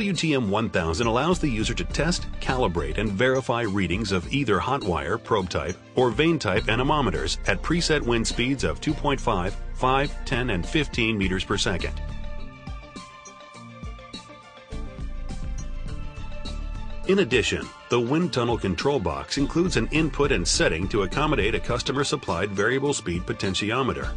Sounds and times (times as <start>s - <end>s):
Speech: 0.0s - 12.0s, 17.1s - 24.1s
Music: 0.0s - 24.1s.